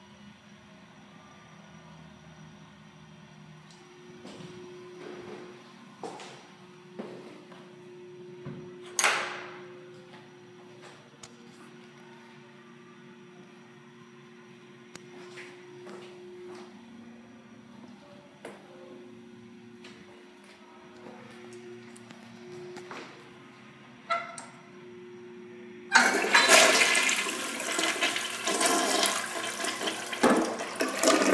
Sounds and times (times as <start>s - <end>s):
Toilet flush: 25.9s - 31.3s.